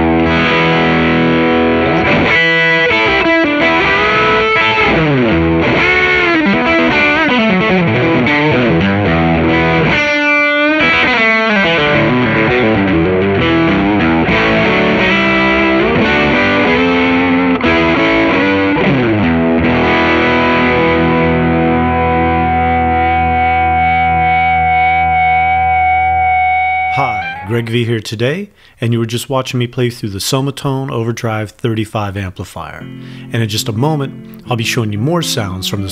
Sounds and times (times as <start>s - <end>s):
Music: 0.0s - 27.7s, 32.8s - 35.9s
Speech: 26.9s - 35.9s.